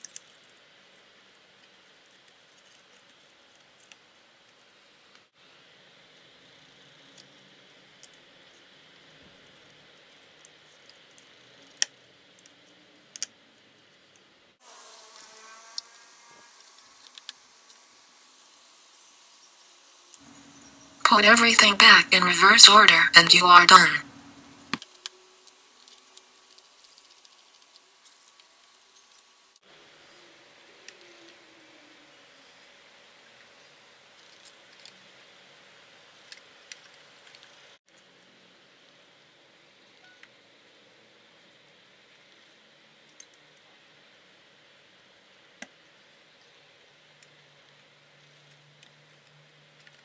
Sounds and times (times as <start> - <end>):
Mosquito: 14.6 - 17.1
Fly, housefly: 14.6 - 17.9.